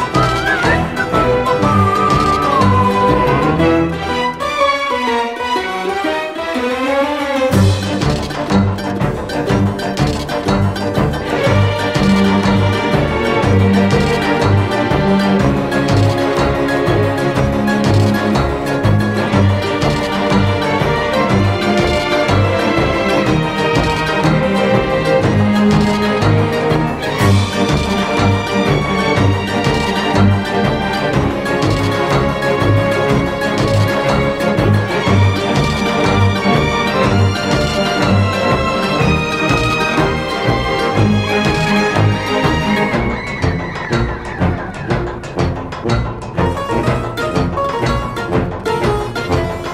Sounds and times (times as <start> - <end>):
Soundtrack music: 0.0 - 49.7.